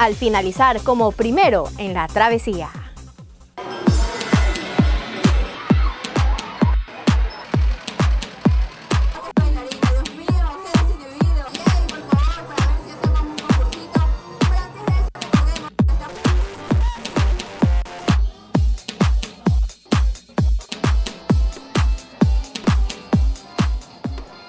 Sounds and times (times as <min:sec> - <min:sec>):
Music: 0:00.0 - 0:24.4.